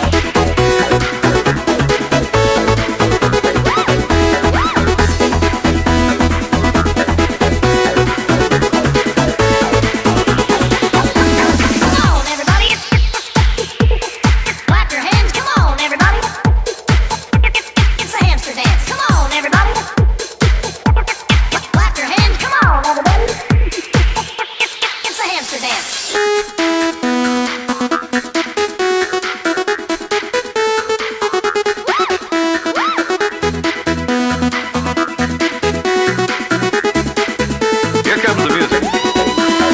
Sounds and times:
Techno: 0:00.0 - 0:39.7
Trance music: 0:00.0 - 0:39.7.

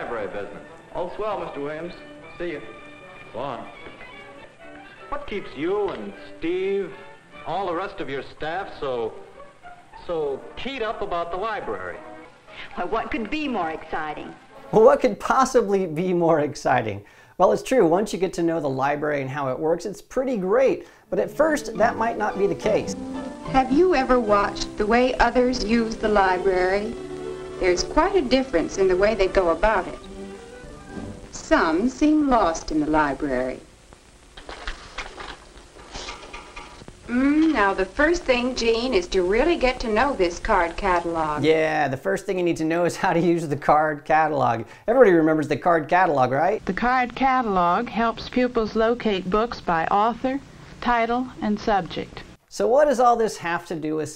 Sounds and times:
Music: 0:00.0 - 0:17.0, 0:17.7 - 0:34.3, 0:37.0 - 0:50.6
Speech: 0:12.8 - 0:23.0, 0:37.2 - 0:54.1.

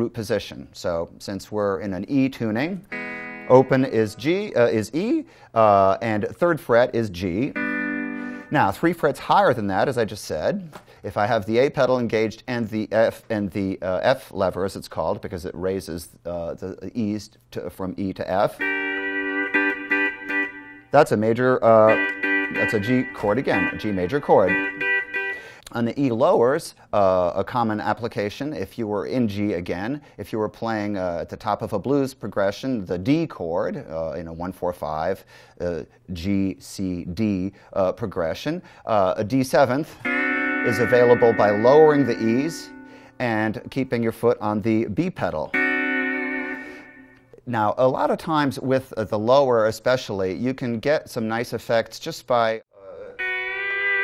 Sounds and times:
Speech: 0:00.0 - 0:02.8, 0:03.5 - 0:07.6, 0:08.5 - 0:18.6, 0:21.0 - 0:24.6, 0:25.7 - 0:40.0, 0:40.7 - 0:45.6, 0:47.4 - 0:53.2.

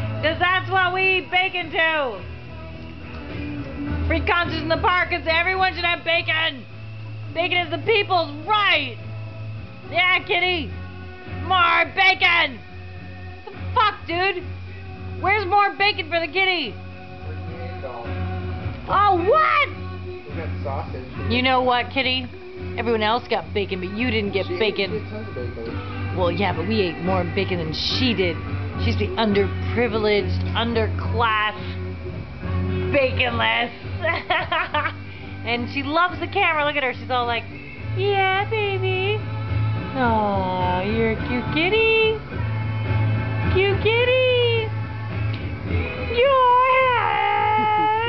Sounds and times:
Music: 0:00.0 - 0:48.0
Speech: 0:20.3 - 0:31.6, 0:43.6 - 0:44.7.

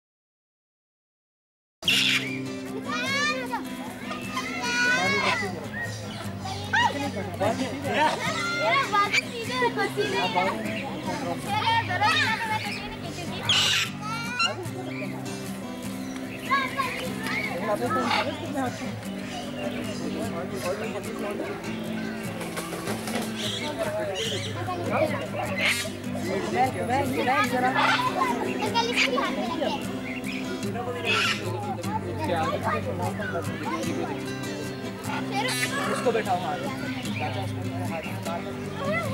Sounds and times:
Bird: 0:01.8 - 0:02.6, 0:04.0 - 0:31.8
Music: 0:01.8 - 0:39.1
Outside, urban or manmade: 0:01.8 - 0:39.1
Speech: 0:02.8 - 0:15.5, 0:16.4 - 0:22.5, 0:23.3 - 0:39.1.

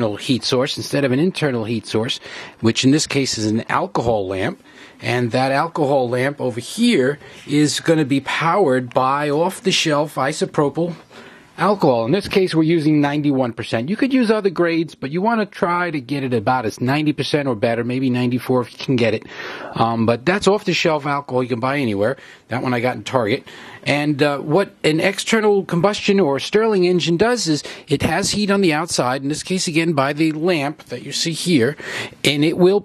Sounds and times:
Speech: 0:00.0 - 0:32.8.

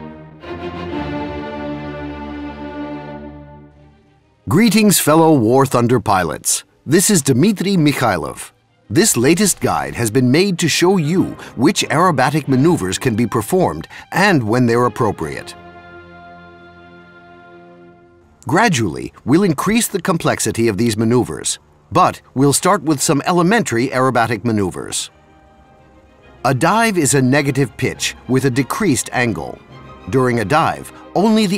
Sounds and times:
Music: 0:00.0 - 0:31.5
Speech: 0:04.5 - 0:15.6, 0:18.4 - 0:25.1, 0:26.4 - 0:31.5.

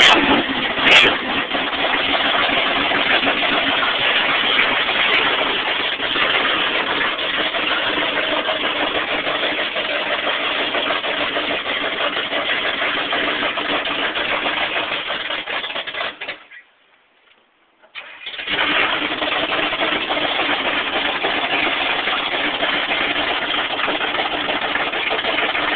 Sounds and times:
Truck: 0:00.0 - 0:16.6, 0:18.0 - 0:25.7.

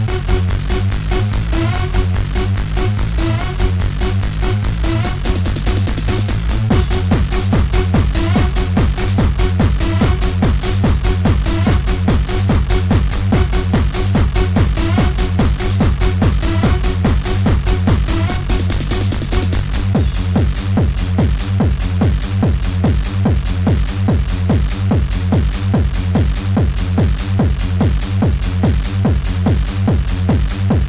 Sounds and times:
Music: 0:00.0 - 0:30.8.

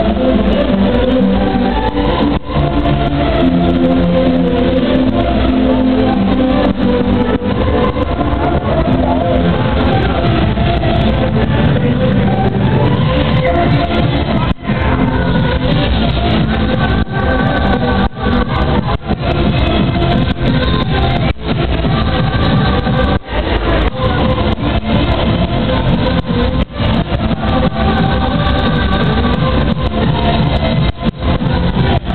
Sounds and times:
Disco: 0:00.0 - 0:32.1
Techno: 0:00.0 - 0:32.1.

